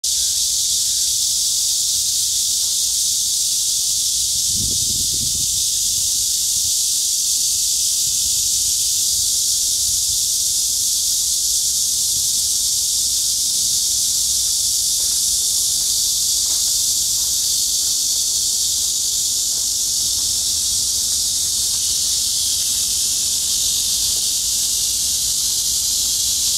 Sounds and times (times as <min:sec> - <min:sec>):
Outside, rural or natural: 0:00.0 - 0:26.5.